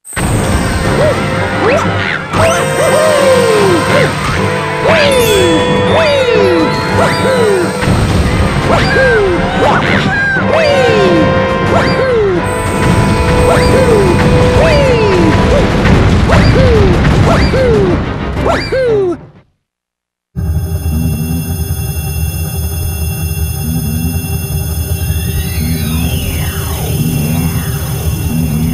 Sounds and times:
Music: 0.1s - 19.6s, 20.4s - 28.7s.

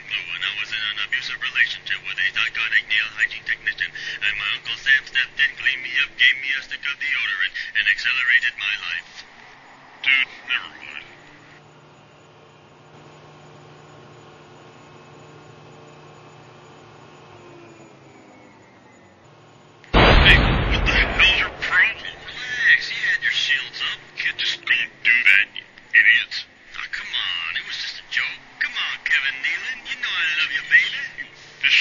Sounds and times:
Speech: 0.0s - 9.3s, 10.0s - 11.2s, 20.2s - 31.8s.

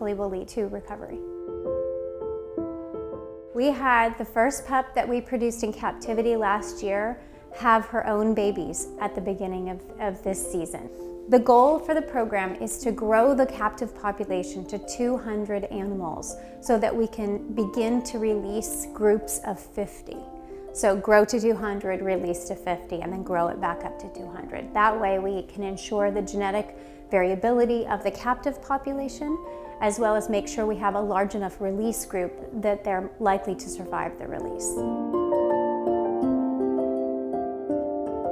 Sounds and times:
Speech: 0.0s - 1.2s, 3.6s - 34.8s
Music: 0.0s - 38.3s.

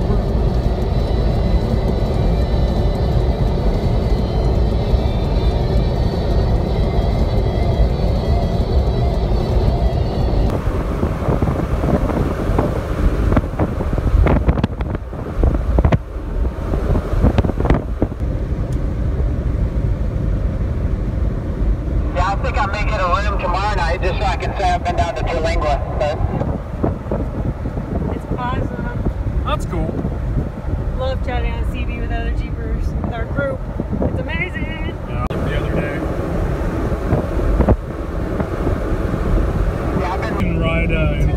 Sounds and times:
Car: 0.0s - 41.3s.

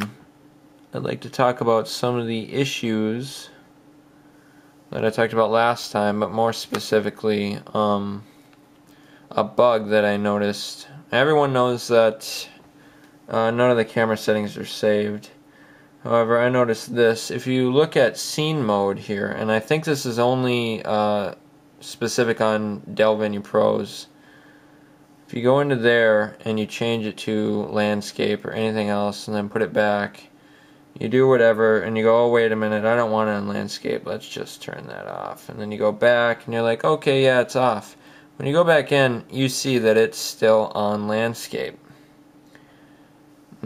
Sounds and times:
Speech: 0.0s - 0.2s, 0.9s - 3.6s, 4.9s - 8.3s, 9.3s - 12.6s, 13.3s - 15.4s, 16.0s - 24.2s, 25.3s - 30.3s, 31.0s - 41.9s.

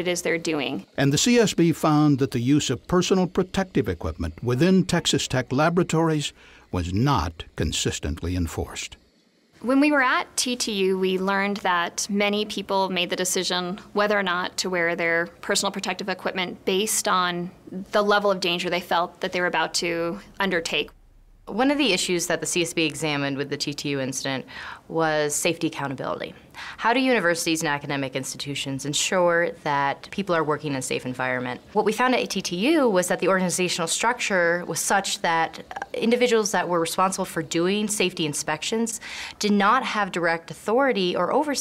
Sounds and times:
Speech: 0.0s - 9.0s, 9.6s - 20.9s, 21.5s - 41.6s.

